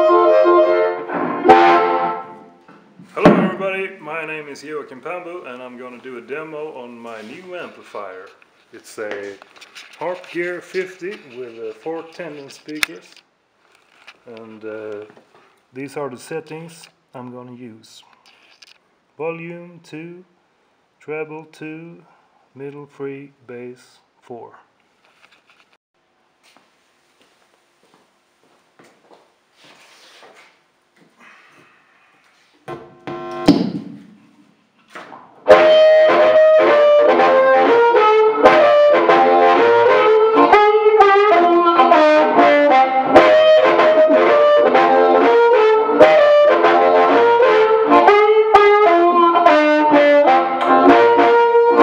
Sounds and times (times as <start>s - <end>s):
Harmonica: 0.0s - 2.5s, 35.5s - 51.8s.